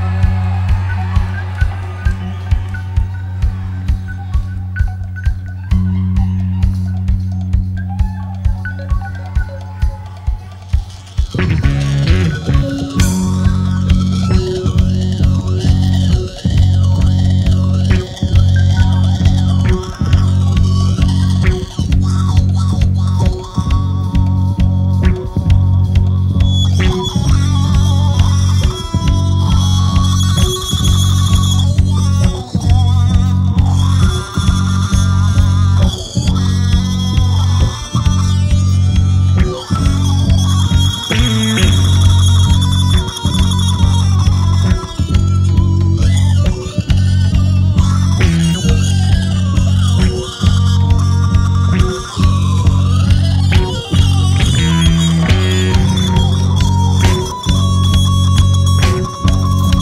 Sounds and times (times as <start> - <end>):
Music: 0.0 - 59.8.